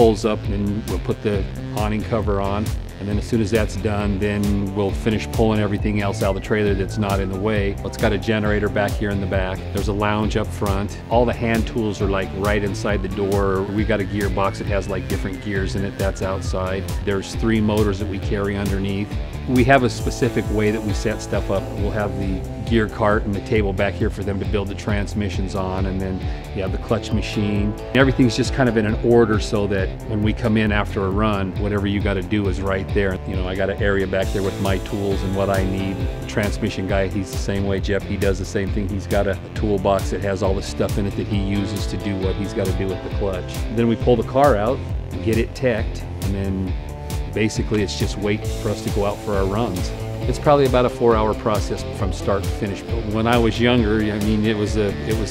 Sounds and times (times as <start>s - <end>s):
Music: 0.0s - 55.3s
Speech: 0.0s - 55.3s.